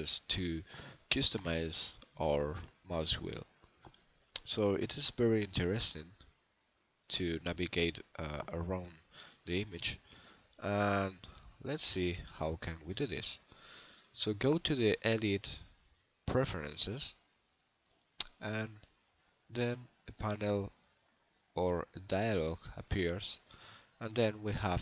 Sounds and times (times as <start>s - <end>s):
Speech: 0.0s - 3.5s, 4.4s - 6.2s, 7.1s - 10.0s, 10.6s - 13.5s, 14.2s - 15.7s, 16.3s - 17.2s, 18.2s - 18.9s, 19.5s - 20.8s, 21.6s - 24.8s.